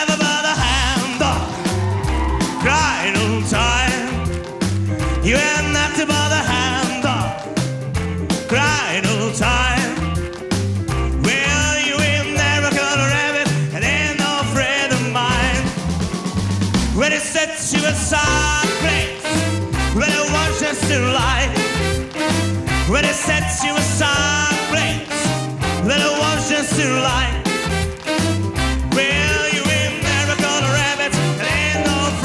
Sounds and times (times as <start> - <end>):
Music: 0.0 - 32.2.